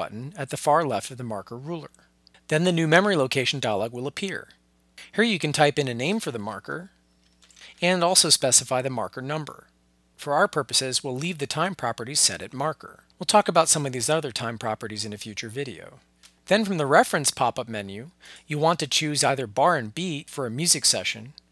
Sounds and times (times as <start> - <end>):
Speech: 0.0 - 7.0, 7.8 - 21.4.